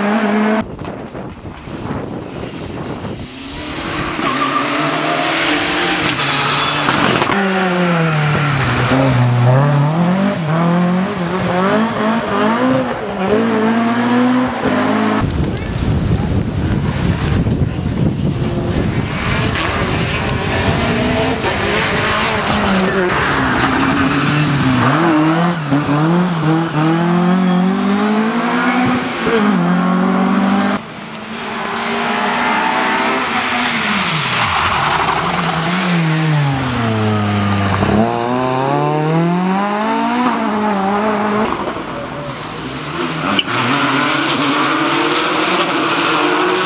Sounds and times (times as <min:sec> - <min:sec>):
Outside, rural or natural: 0:00.0 - 0:46.6
Race car, auto racing: 0:00.0 - 0:46.6.